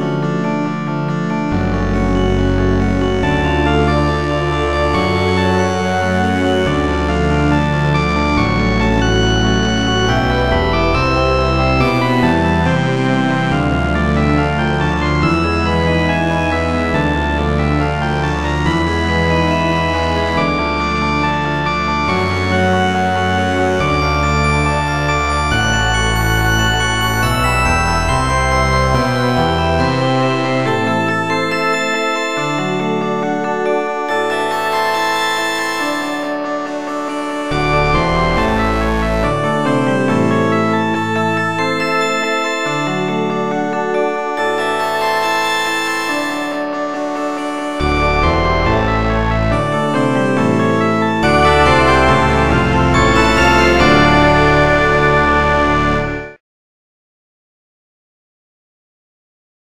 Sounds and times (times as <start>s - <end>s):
Music: 0.0s - 56.4s.